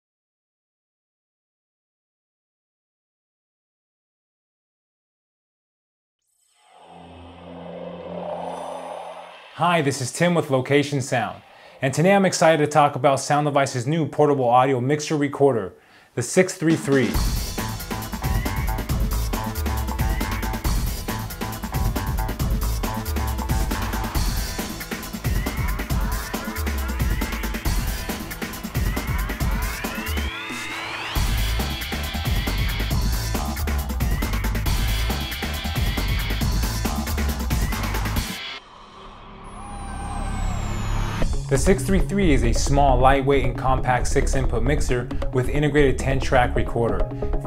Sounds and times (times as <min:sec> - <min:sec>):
Music: 0:16.7 - 0:47.4.